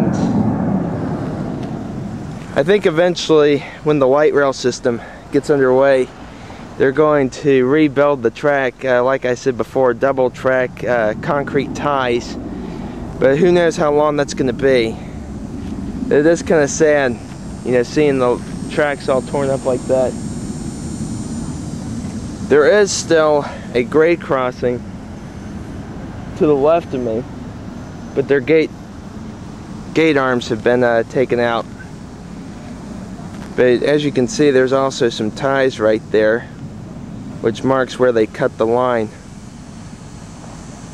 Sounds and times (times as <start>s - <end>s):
Speech: 0.0s - 0.4s, 2.6s - 6.1s, 6.8s - 12.4s, 13.2s - 15.1s, 16.1s - 20.2s, 22.5s - 24.8s, 26.4s - 27.3s, 28.2s - 28.7s, 30.0s - 31.8s, 33.6s - 36.6s, 37.4s - 39.2s
Outside, rural or natural: 0.0s - 40.9s.